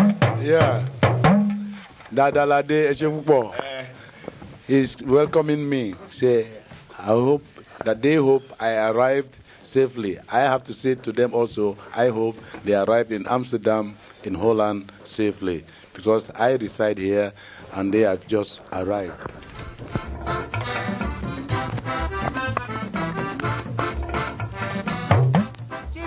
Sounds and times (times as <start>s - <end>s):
Drum: 0.0s - 1.9s, 19.6s - 26.0s
Speech: 0.4s - 0.9s, 2.1s - 4.0s, 4.7s - 19.2s.